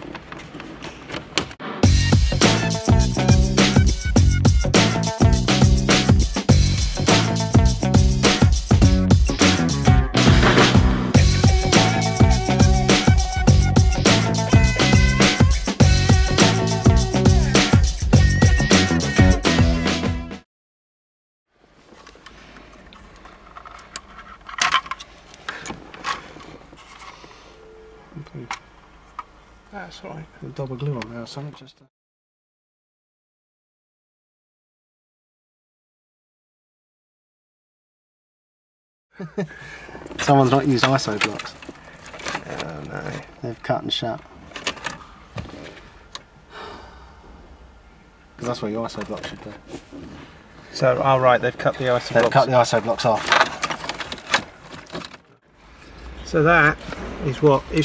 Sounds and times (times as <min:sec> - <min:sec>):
Music: 0:01.7 - 0:20.4.